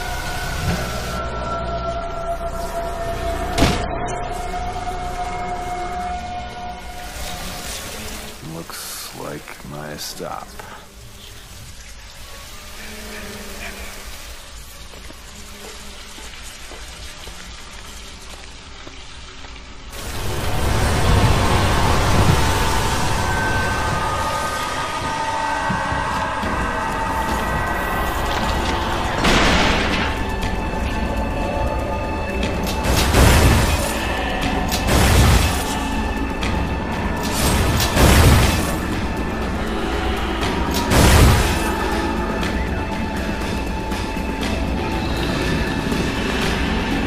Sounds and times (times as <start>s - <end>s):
Music: 0.0s - 47.0s.